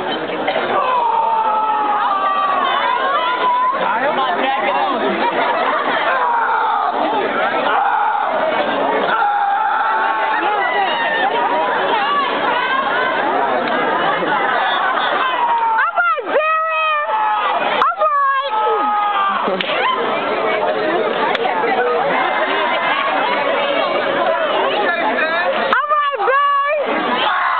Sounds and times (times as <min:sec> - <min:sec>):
Speech: 0:02.2 - 0:07.9, 0:17.8 - 0:27.2.